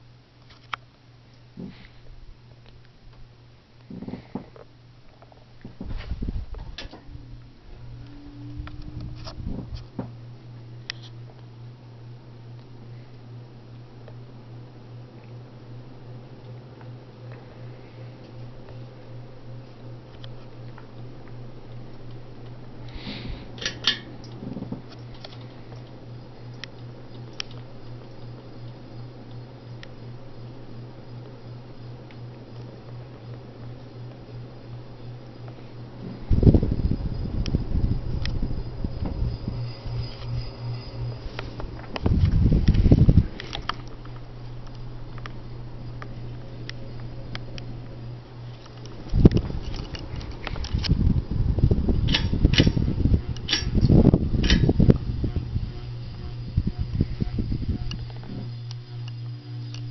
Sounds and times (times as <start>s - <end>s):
Mechanical fan: 0.0s - 59.9s.